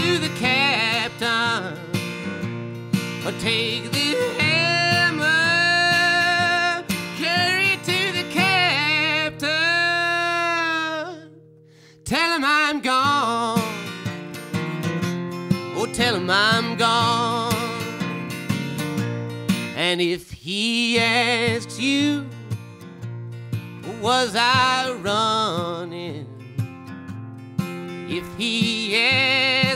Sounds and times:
Male singing: 0.0 - 2.0, 3.2 - 11.4, 12.0 - 13.9, 15.7 - 18.0, 19.8 - 22.4, 23.8 - 26.4, 28.1 - 29.7
Music: 0.0 - 29.7.

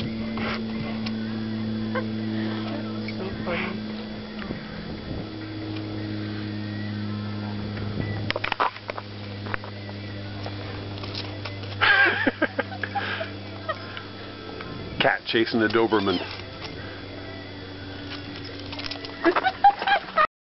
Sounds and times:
Speech: 15.0 - 16.3
Meow: 15.9 - 16.4.

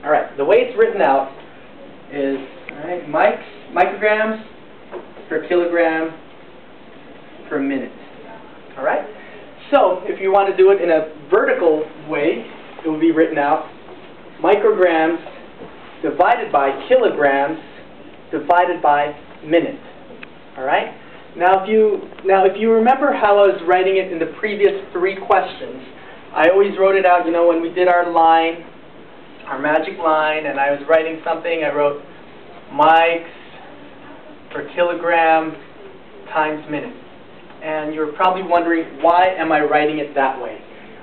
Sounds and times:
Speech: 0.0 - 1.4, 2.0 - 4.6, 5.3 - 6.2, 7.4 - 13.8, 14.4 - 20.0, 20.6 - 28.7, 29.4 - 37.0, 37.6 - 41.0.

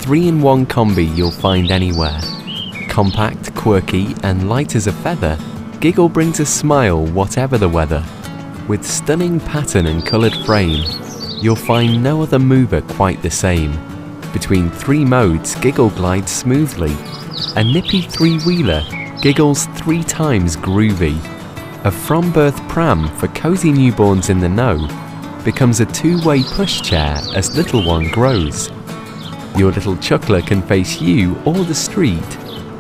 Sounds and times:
Speech: 0.0 - 2.3, 2.9 - 8.1, 8.7 - 13.8, 14.4 - 17.0, 17.6 - 28.7, 29.6 - 32.4
Music: 0.0 - 32.8.

